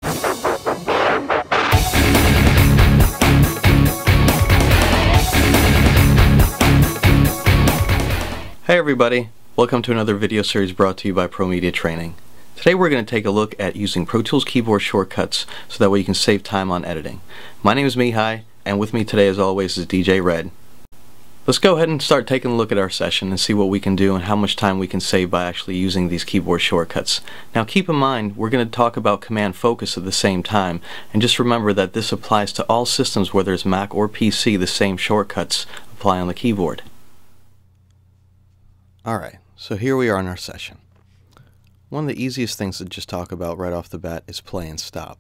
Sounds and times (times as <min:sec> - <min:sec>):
Speech: 0:08.6 - 0:20.6, 0:21.5 - 0:36.9, 0:39.0 - 0:40.8, 0:41.9 - 0:45.2.